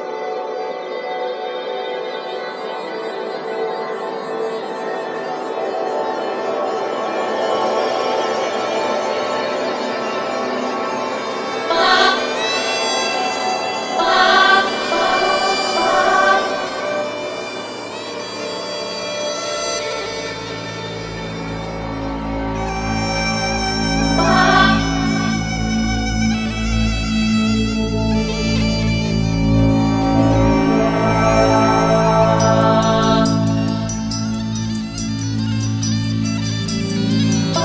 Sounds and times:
Tender music: 0.0s - 37.6s.

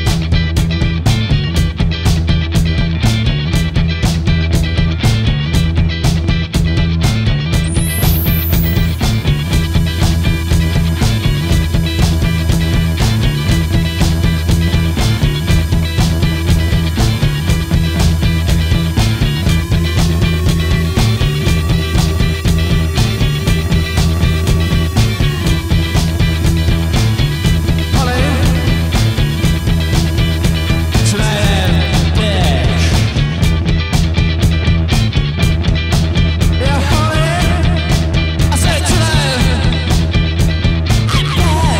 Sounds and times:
Music: 0.0s - 41.7s.

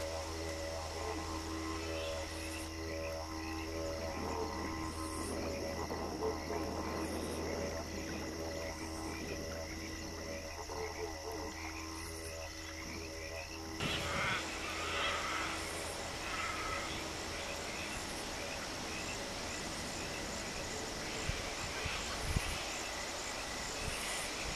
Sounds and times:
Animal: 0.0s - 18.7s
Outside, rural or natural: 0.0s - 24.5s.

